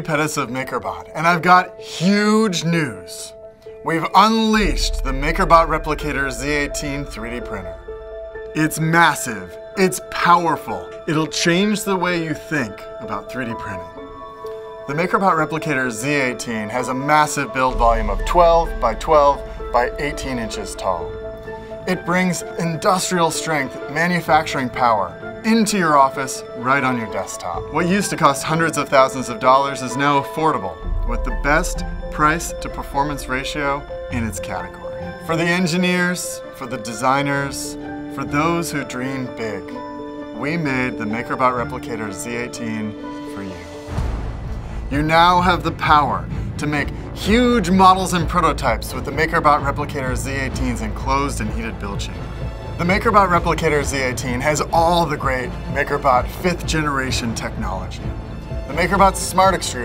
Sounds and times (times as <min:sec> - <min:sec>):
Speech: 0:00.0 - 0:07.8, 0:08.6 - 0:13.9, 0:14.9 - 0:21.1, 0:21.8 - 0:39.8, 0:40.4 - 0:43.8, 0:44.9 - 0:52.2, 0:52.8 - 0:58.1, 0:58.7 - 0:59.8
Music: 0:00.0 - 0:59.8.